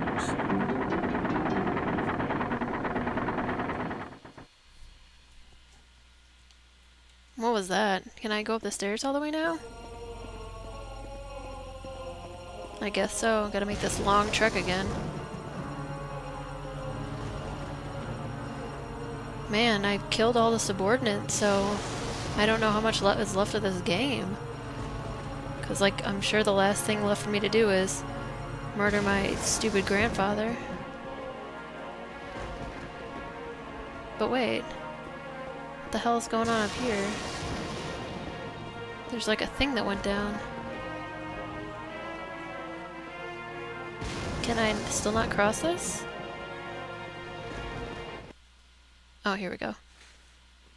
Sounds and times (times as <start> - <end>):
Music: 0.0 - 4.4, 9.2 - 48.4
Speech: 7.4 - 9.6, 12.8 - 14.9, 19.5 - 21.8, 22.4 - 24.4, 25.6 - 28.0, 28.8 - 30.8, 35.9 - 37.2, 39.1 - 40.4, 44.4 - 46.0, 49.2 - 49.8.